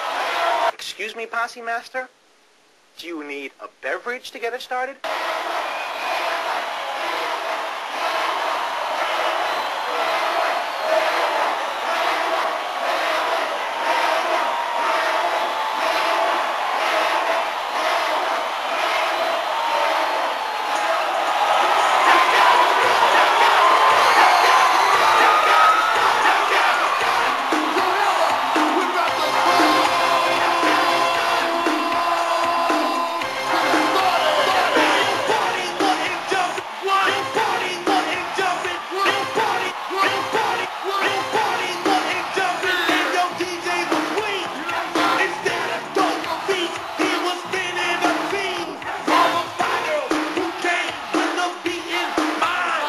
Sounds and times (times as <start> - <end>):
Music: 22.0 - 52.8.